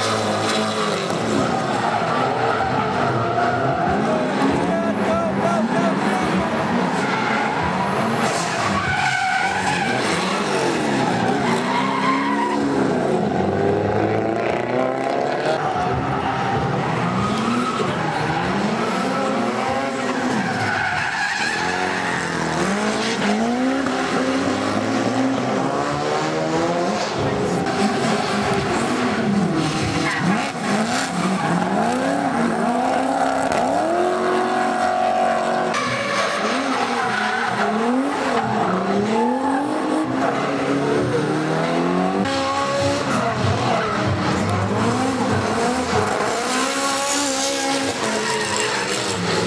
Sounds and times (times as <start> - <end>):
Tire squeal: 0.0 - 4.4, 6.7 - 13.1, 15.4 - 25.2, 27.0 - 40.7, 42.3 - 49.4
Race car, auto racing: 0.0 - 49.4
Skidding: 0.0 - 49.4.